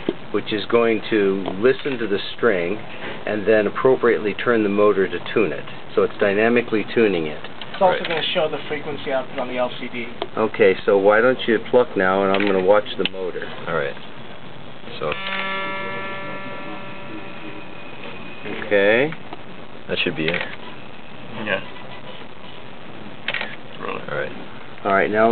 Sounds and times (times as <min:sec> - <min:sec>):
Speech: 0:00.4 - 0:14.0, 0:19.9 - 0:20.5, 0:23.8 - 0:25.3.